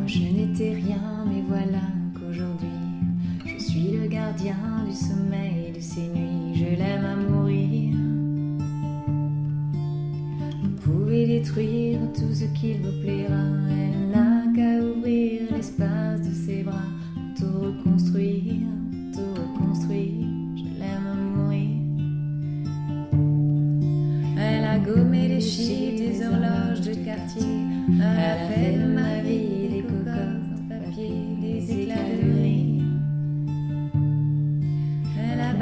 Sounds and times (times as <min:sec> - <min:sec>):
Strum: 0:15.7 - 0:35.6.